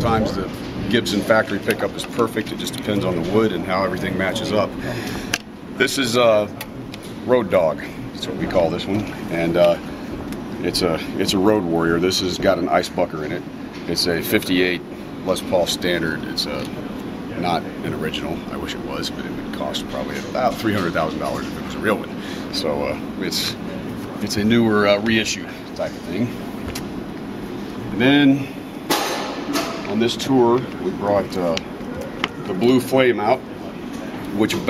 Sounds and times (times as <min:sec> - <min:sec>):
Speech: 0:00.0 - 0:04.8, 0:07.3 - 0:09.8, 0:10.6 - 0:16.7, 0:17.3 - 0:23.6, 0:24.2 - 0:26.4, 0:34.3 - 0:34.7.